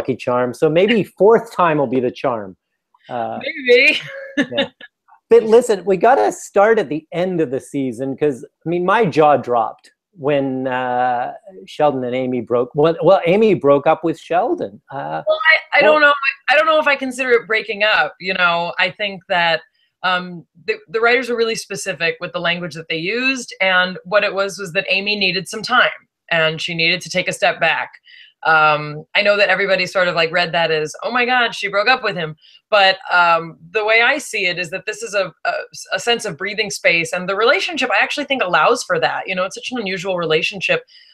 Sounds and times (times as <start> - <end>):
Speech: 0.0 - 2.5, 3.1 - 40.8.